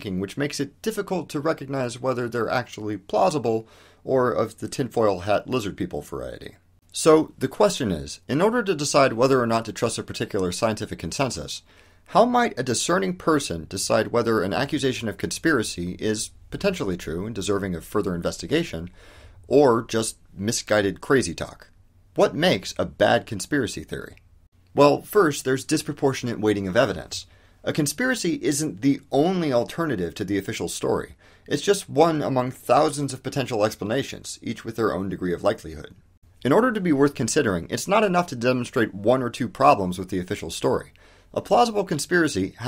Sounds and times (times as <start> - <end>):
Speech: 0.0 - 42.6.